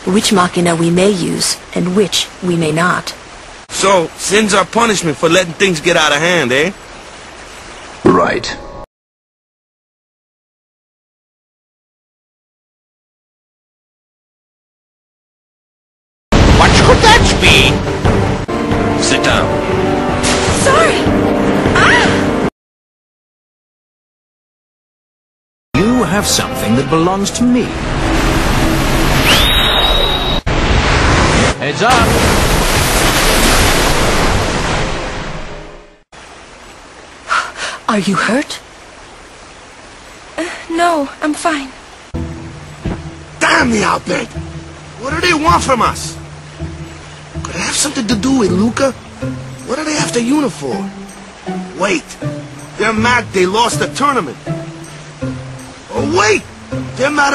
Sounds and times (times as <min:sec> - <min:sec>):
Pink noise: 0:27.4 - 0:35.6, 0:36.2 - 0:57.3.